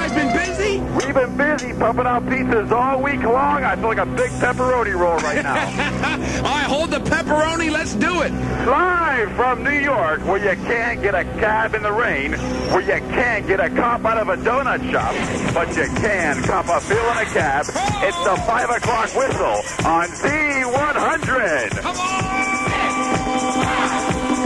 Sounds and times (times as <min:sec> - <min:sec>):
Speech: 0:00.0 - 0:05.7, 0:06.4 - 0:21.9.